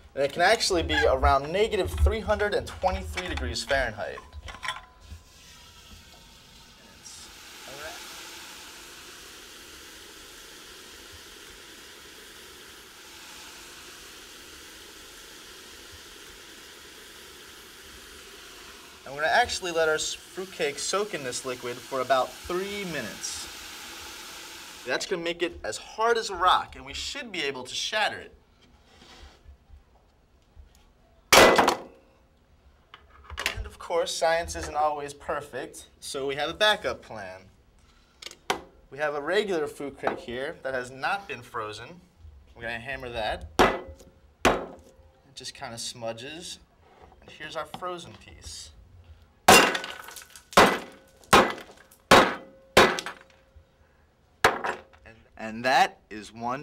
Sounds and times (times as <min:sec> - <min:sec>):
Speech: 0:00.2 - 0:04.2, 0:06.9 - 0:08.0, 0:19.1 - 0:23.5, 0:24.9 - 0:28.4, 0:33.7 - 0:37.5, 0:38.9 - 0:43.5, 0:45.3 - 0:48.8, 0:55.0 - 0:56.6
Liquid: 0:05.0 - 0:24.9.